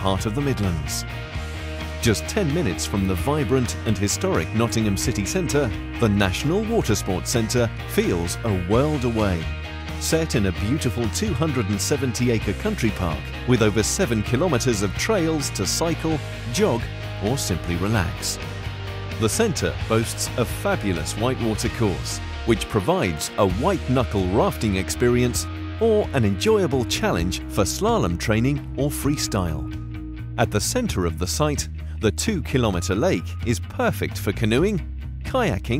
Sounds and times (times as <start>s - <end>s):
Speech: 0.0s - 1.1s, 2.0s - 18.4s, 19.2s - 29.7s, 30.4s - 35.8s
Music: 0.0s - 35.8s.